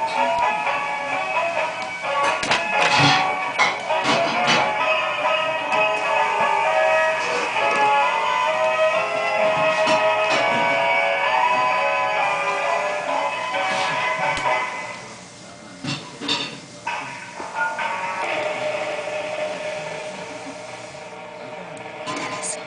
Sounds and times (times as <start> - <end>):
Music: 0.0 - 15.3, 16.8 - 22.6.